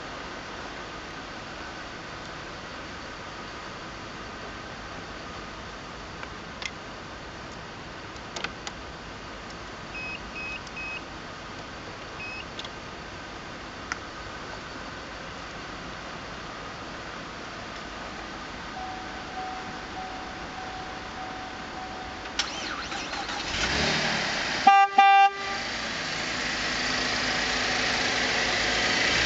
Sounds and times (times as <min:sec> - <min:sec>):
Car: 0:00.0 - 0:29.2
Engine: 0:00.0 - 0:29.2.